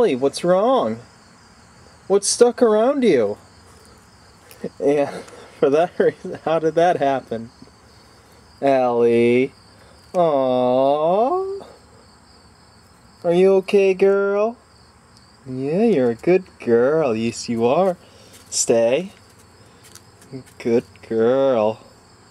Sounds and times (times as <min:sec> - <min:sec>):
Speech: 0:00.0 - 0:01.1, 0:02.1 - 0:03.4, 0:04.6 - 0:07.6, 0:08.6 - 0:09.6, 0:10.2 - 0:11.8, 0:13.2 - 0:14.6, 0:15.4 - 0:19.2, 0:20.3 - 0:21.9.